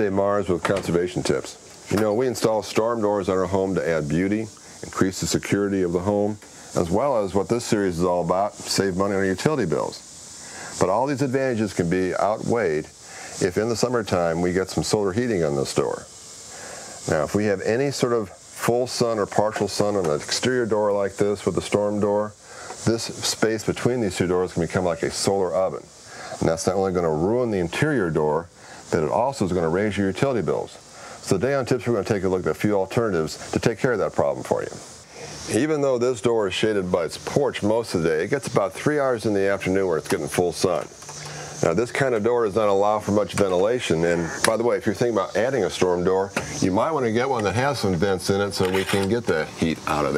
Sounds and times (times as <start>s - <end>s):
Speech: 0.0s - 10.0s, 10.8s - 16.1s, 17.1s - 34.8s, 35.5s - 40.9s, 41.6s - 50.1s.